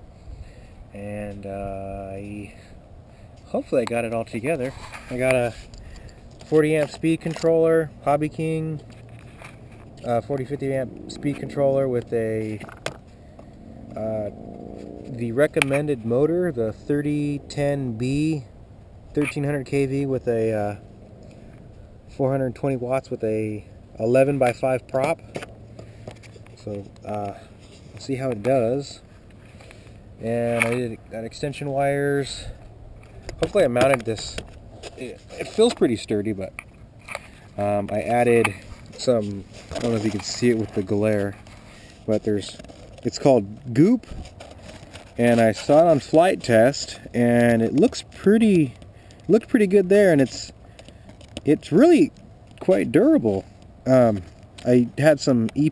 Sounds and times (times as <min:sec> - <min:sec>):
Speech: 0:01.0 - 0:02.7, 0:03.5 - 0:05.6, 0:06.5 - 0:08.8, 0:10.0 - 0:12.7, 0:14.0 - 0:14.3, 0:15.1 - 0:18.5, 0:19.1 - 0:20.8, 0:22.1 - 0:25.2, 0:26.6 - 0:27.4, 0:28.0 - 0:29.0, 0:30.2 - 0:32.6, 0:33.4 - 0:34.4, 0:35.0 - 0:36.5, 0:37.6 - 0:41.4, 0:42.1 - 0:44.1, 0:45.2 - 0:50.6, 0:51.4 - 0:55.7.